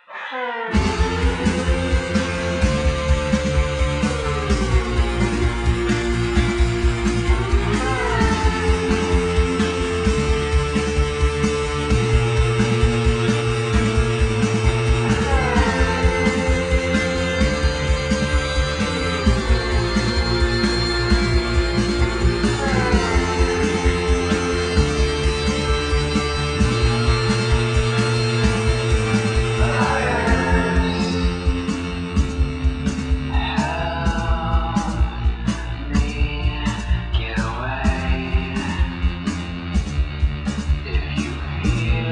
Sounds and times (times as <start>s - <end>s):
Theme music: 0.7s - 42.1s.